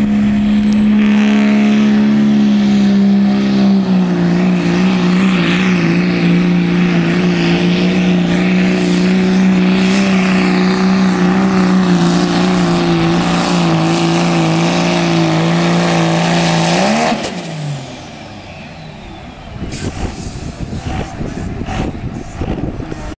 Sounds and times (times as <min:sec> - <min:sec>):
Truck: 0:00.0 - 0:23.1.